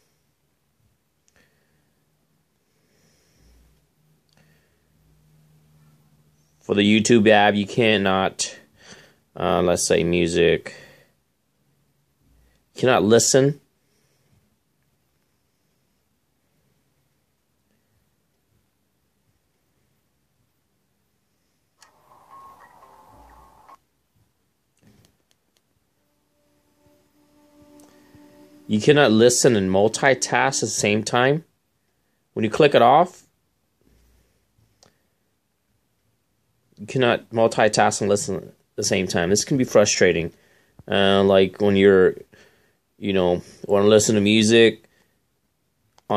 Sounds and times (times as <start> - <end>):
Speech: 6.6 - 8.7, 9.4 - 11.0, 12.7 - 13.7, 28.6 - 31.5, 32.4 - 33.3, 36.8 - 42.3, 43.0 - 44.8.